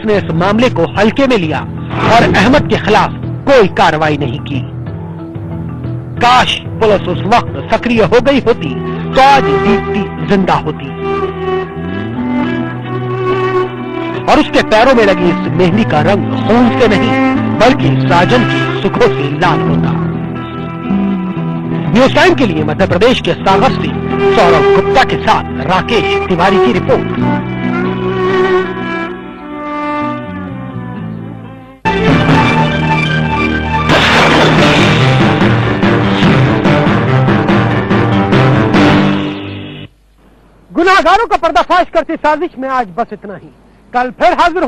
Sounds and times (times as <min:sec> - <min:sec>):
Speech: 0:00.0 - 0:04.7, 0:06.2 - 0:10.9, 0:14.3 - 0:20.0, 0:21.9 - 0:27.1, 0:40.7 - 0:44.6.